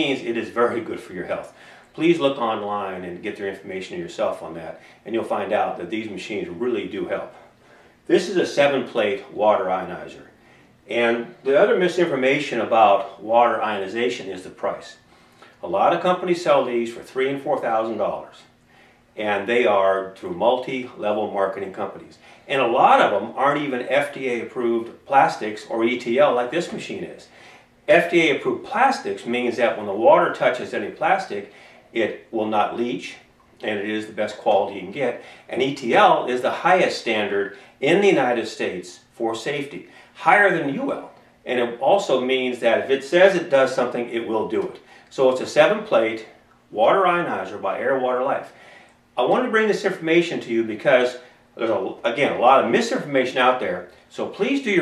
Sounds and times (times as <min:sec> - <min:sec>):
Speech: 0:00.0 - 0:07.5, 0:08.1 - 0:15.0, 0:15.6 - 0:18.6, 0:19.2 - 0:27.3, 0:27.9 - 0:48.6, 0:49.2 - 0:54.8.